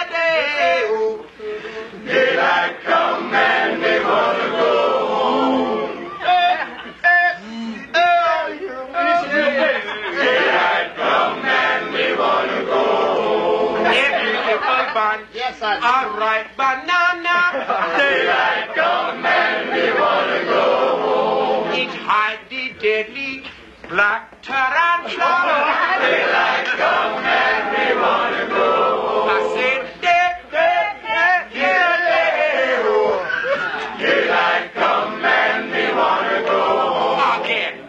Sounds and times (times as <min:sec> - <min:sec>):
Speech: 0:06.2 - 0:10.1.